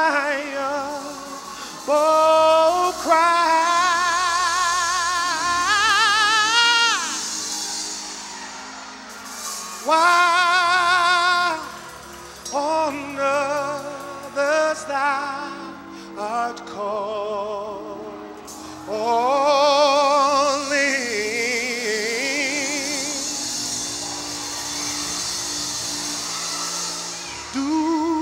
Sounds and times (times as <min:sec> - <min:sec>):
Gospel music: 0:00.0 - 0:28.2.